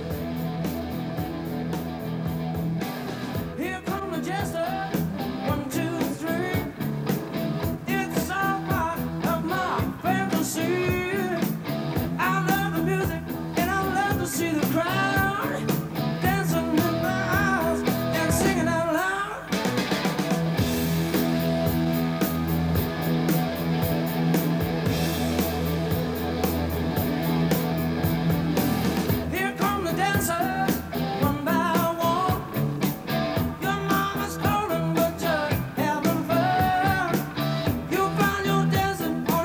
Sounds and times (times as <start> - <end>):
Rock and roll: 0.0 - 39.4.